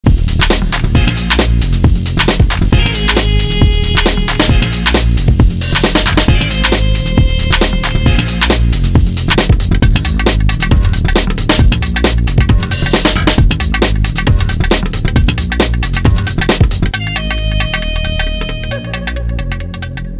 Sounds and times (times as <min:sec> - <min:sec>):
Drum and bass: 0:00.0 - 0:20.1.